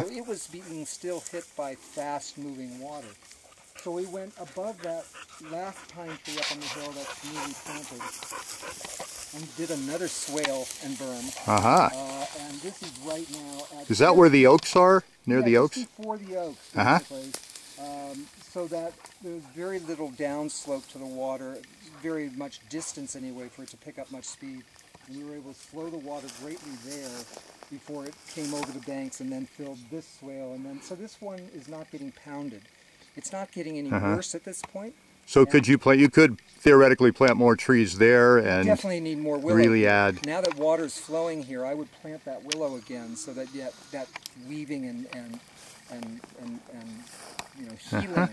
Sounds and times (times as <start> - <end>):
Animal: 0.0 - 14.0.